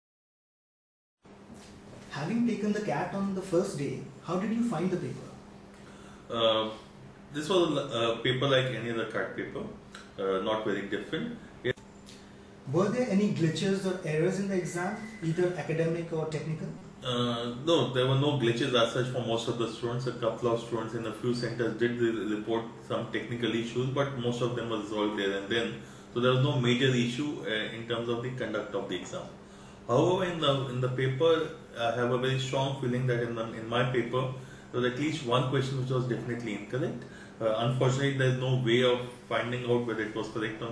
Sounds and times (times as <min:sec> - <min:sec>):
Speech: 0:02.1 - 0:05.4, 0:06.3 - 0:11.8, 0:12.7 - 0:40.7.